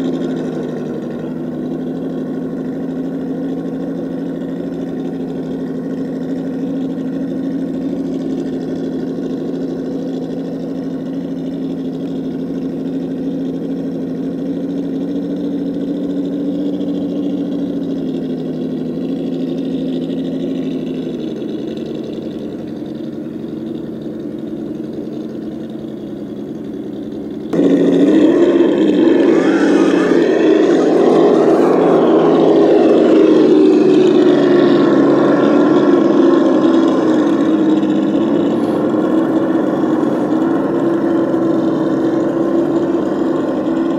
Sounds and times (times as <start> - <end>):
Outside, rural or natural: 0.0 - 43.9
Truck: 0.0 - 43.9.